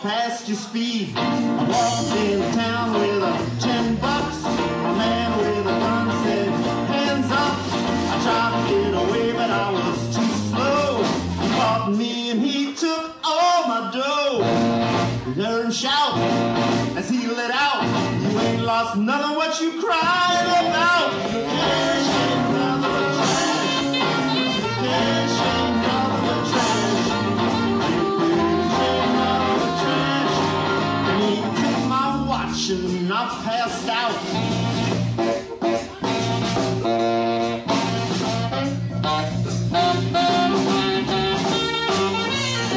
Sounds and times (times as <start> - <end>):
Bluegrass: 0.0 - 12.8, 13.4 - 42.7
Singing: 1.7 - 14.5, 17.0 - 34.2.